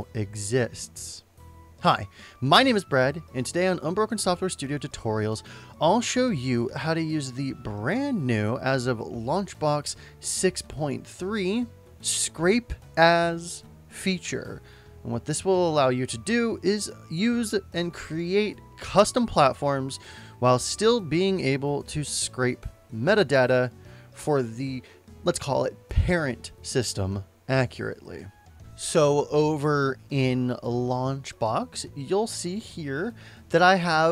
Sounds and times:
Speech: 0:00.0 - 0:01.2, 0:01.8 - 0:34.1
Music: 0:00.0 - 0:34.1.

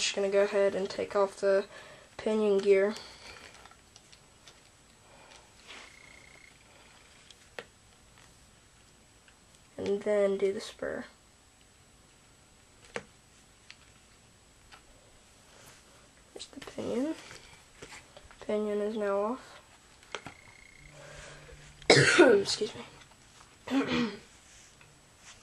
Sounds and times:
Speech: 0:00.0 - 0:03.0, 0:09.8 - 0:11.2, 0:16.4 - 0:17.3, 0:18.4 - 0:19.6, 0:22.1 - 0:23.0.

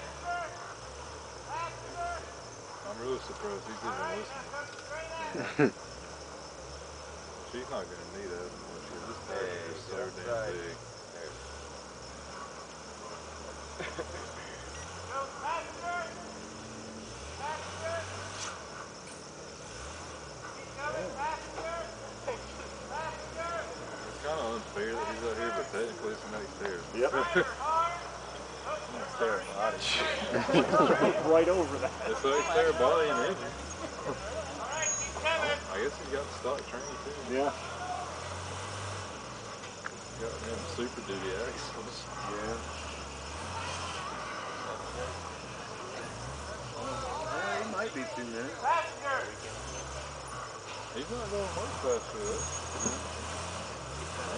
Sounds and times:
Vehicle: 0:00.0 - 0:54.3.

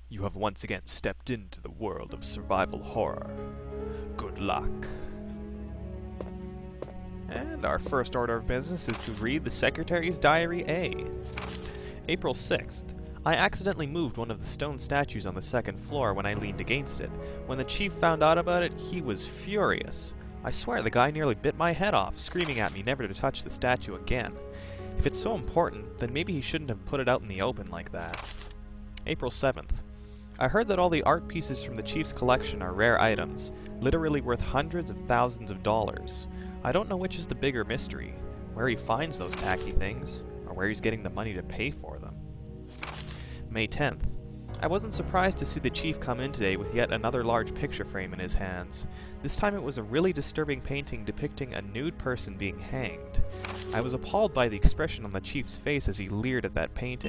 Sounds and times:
Speech: 0:00.1 - 0:03.4, 0:04.2 - 0:05.1, 0:07.3 - 0:11.2, 0:12.1 - 0:24.4, 0:25.0 - 0:28.2, 0:29.0 - 0:29.8, 0:30.4 - 0:42.2, 0:43.5 - 0:57.0
Music: 0:01.6 - 0:57.0.

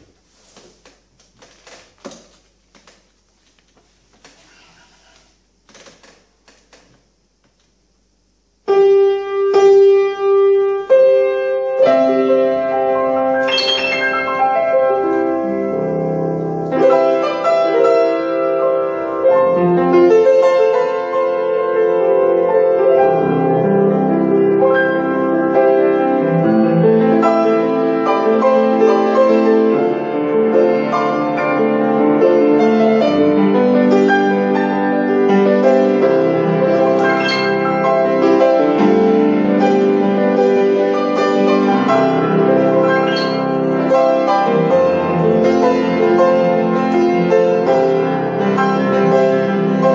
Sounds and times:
Music: 0:08.6 - 0:49.9.

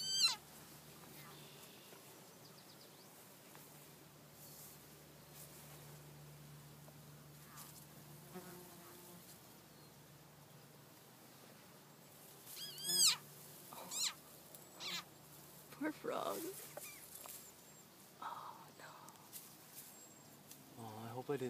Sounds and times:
Animal: 0:00.0 - 0:00.4, 0:12.5 - 0:15.1
Speech: 0:15.8 - 0:16.6, 0:20.8 - 0:21.4.

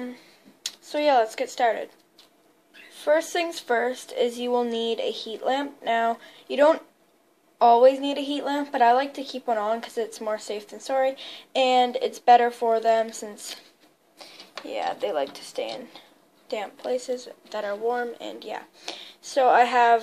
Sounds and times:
Speech: 0:00.0 - 0:02.0, 0:02.9 - 0:06.9, 0:07.6 - 0:13.7, 0:14.6 - 0:20.0.

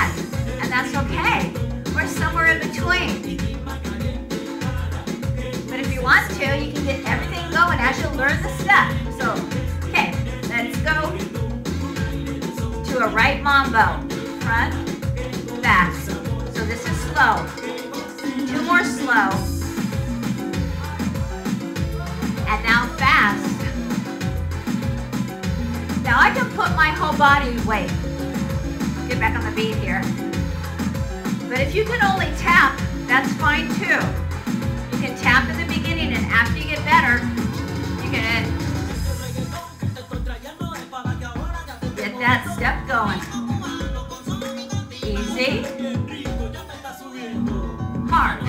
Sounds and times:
Speech: 0:00.0 - 0:03.2, 0:05.7 - 0:11.2, 0:12.9 - 0:14.8, 0:15.6 - 0:17.5, 0:18.5 - 0:19.5, 0:22.4 - 0:23.7, 0:26.0 - 0:28.0, 0:29.1 - 0:30.1, 0:31.5 - 0:34.2, 0:35.0 - 0:37.3, 0:38.0 - 0:38.6, 0:42.0 - 0:43.3, 0:45.0 - 0:45.7, 0:48.1 - 0:48.4
Exciting music: 0:00.0 - 0:48.4.

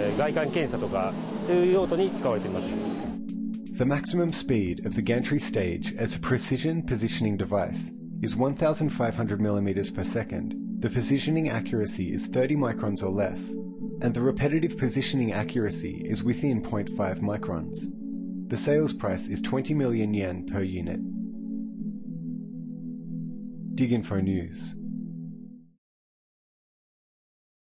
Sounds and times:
Speech: 0:00.0 - 0:03.0, 0:03.8 - 0:17.9, 0:18.5 - 0:21.0, 0:23.8 - 0:24.8
Music: 0:00.0 - 0:25.8.

